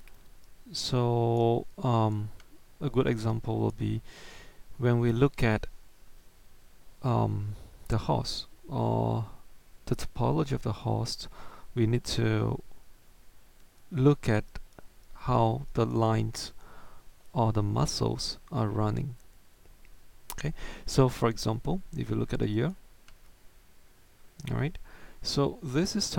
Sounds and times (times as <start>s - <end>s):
Speech: 0.7s - 4.0s, 4.8s - 5.7s, 7.0s - 12.6s, 13.9s - 14.6s, 15.2s - 16.6s, 17.4s - 19.2s, 20.3s - 22.8s, 24.4s - 26.1s.